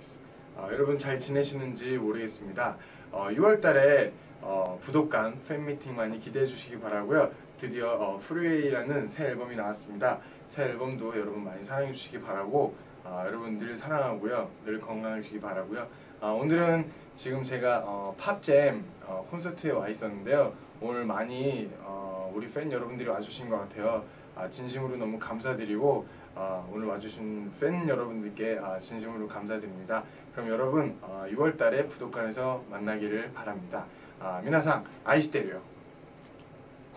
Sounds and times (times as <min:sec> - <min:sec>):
Speech: 0:00.0 - 0:35.7.